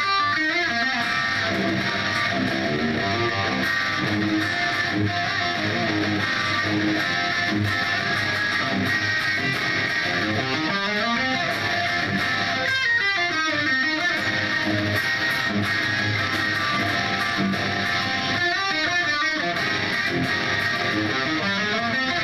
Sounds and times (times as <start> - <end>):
Electric guitar: 0.0 - 22.2.